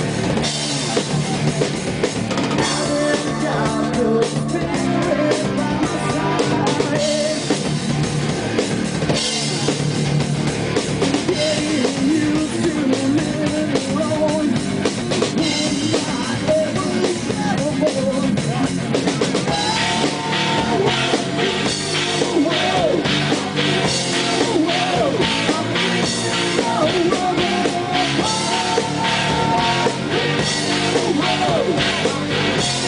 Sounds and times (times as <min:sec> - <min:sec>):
Heavy metal: 0:00.0 - 0:32.8.